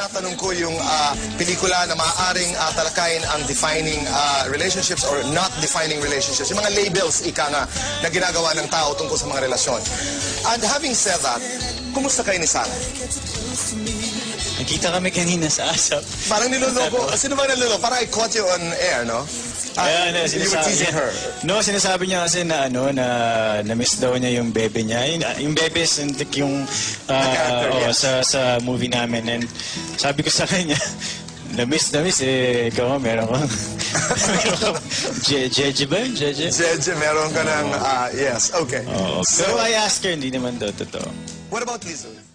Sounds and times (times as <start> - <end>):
Music: 0.0 - 42.3.